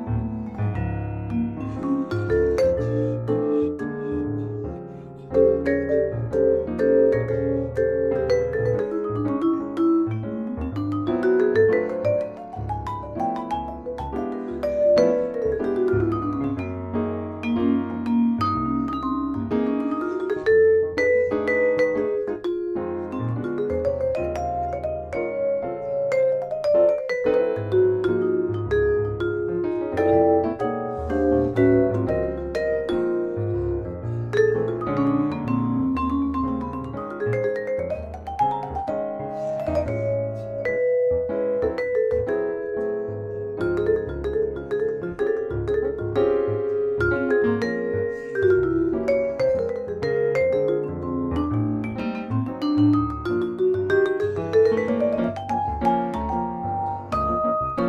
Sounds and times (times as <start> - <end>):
Vibraphone: 0.0 - 57.8.